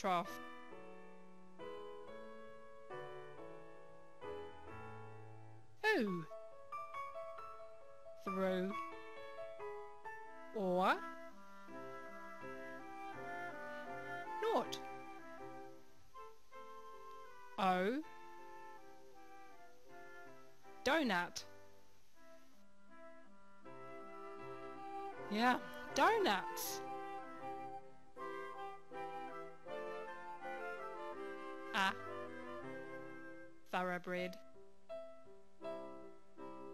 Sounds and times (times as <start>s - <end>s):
Speech: 0.0s - 0.3s, 5.8s - 6.3s, 8.3s - 8.8s, 10.6s - 11.0s, 14.4s - 14.8s, 17.6s - 18.0s, 20.9s - 21.5s, 25.3s - 26.8s, 31.8s - 32.0s, 33.7s - 34.4s
Music: 0.0s - 36.7s.